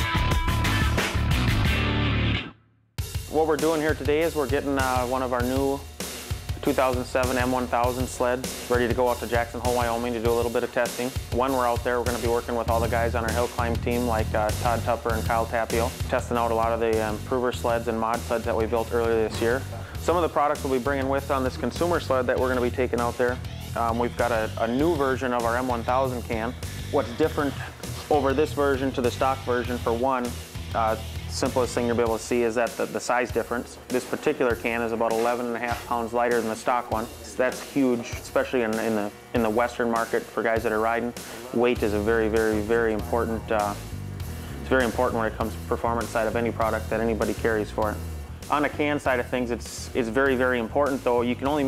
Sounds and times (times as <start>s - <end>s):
Music: 0.0s - 51.6s
Speech: 3.3s - 5.8s, 6.6s - 43.8s, 44.6s - 51.6s.